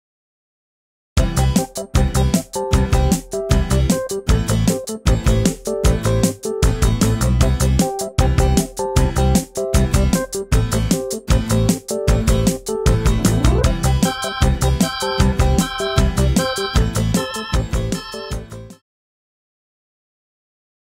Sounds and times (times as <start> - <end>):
Music: 1.2 - 18.8.